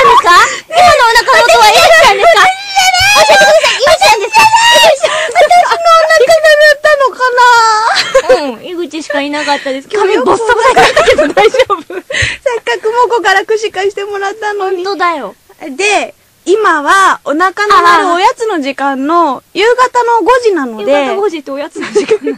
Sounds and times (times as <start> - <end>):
Speech: 0.0 - 11.9, 12.5 - 22.0.